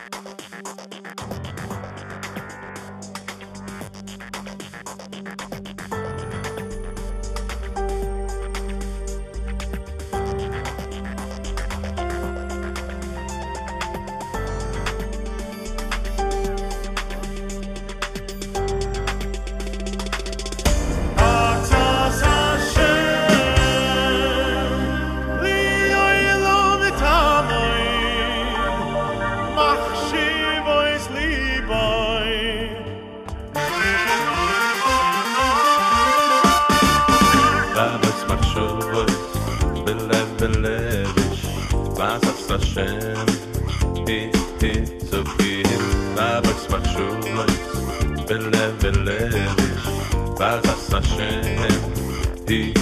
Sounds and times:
Music: 0:00.0 - 0:52.8.

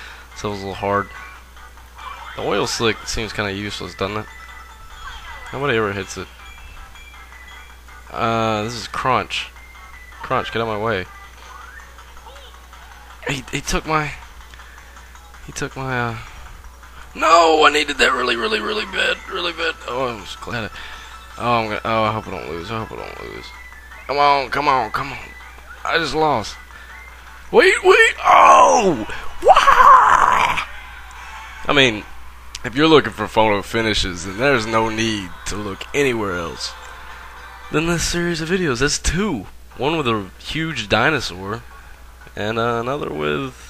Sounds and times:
Music: 0:00.0 - 0:43.7.

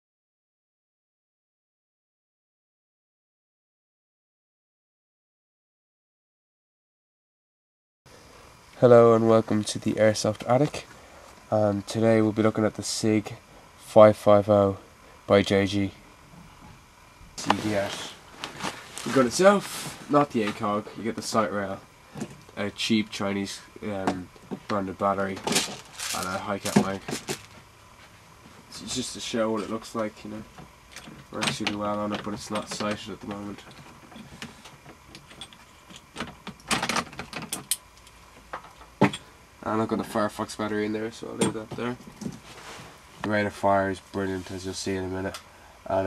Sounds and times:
Speech: 0:08.8 - 0:10.9, 0:11.5 - 0:16.0, 0:17.4 - 0:18.2, 0:19.0 - 0:21.8, 0:22.6 - 0:27.2, 0:28.7 - 0:30.5, 0:31.3 - 0:33.7, 0:39.6 - 0:42.0, 0:43.2 - 0:46.0.

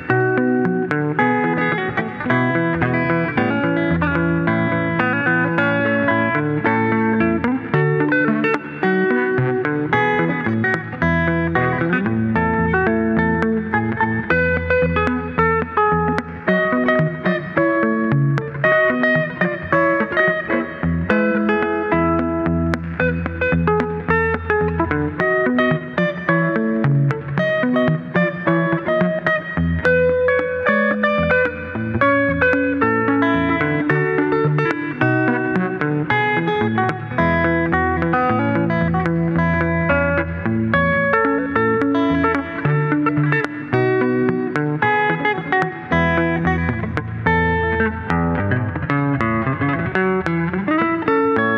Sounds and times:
Guitar: 0:00.0 - 0:51.5.

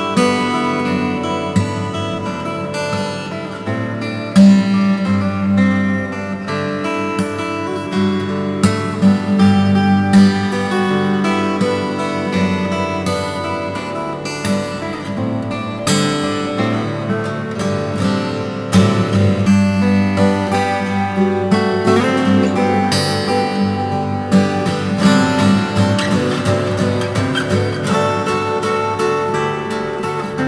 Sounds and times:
Strum: 0:00.0 - 0:30.4.

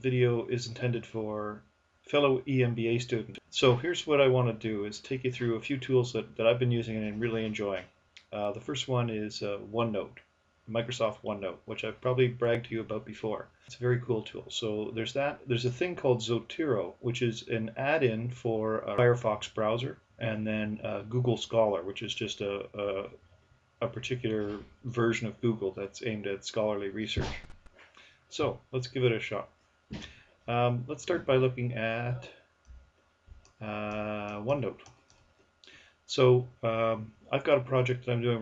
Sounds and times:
Speech: 0:00.0 - 0:23.2, 0:23.8 - 0:27.4, 0:28.3 - 0:29.5, 0:30.5 - 0:32.4, 0:33.6 - 0:34.9, 0:36.1 - 0:38.4.

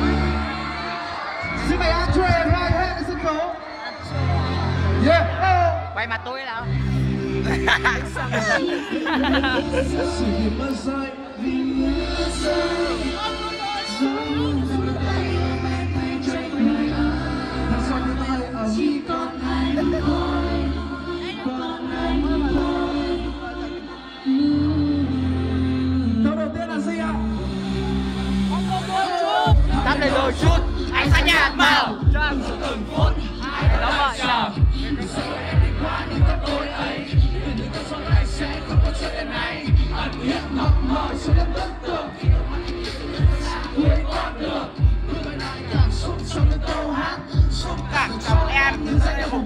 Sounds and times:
Music: 0:00.0 - 0:49.4.

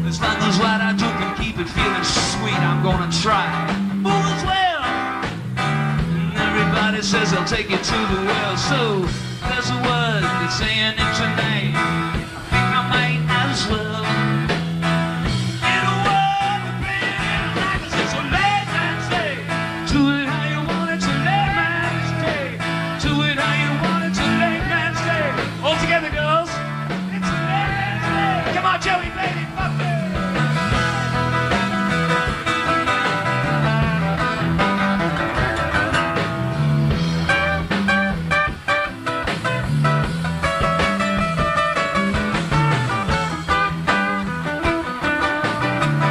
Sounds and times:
Guitar: 0:00.0 - 0:46.1
Rock music: 0:00.0 - 0:46.1.

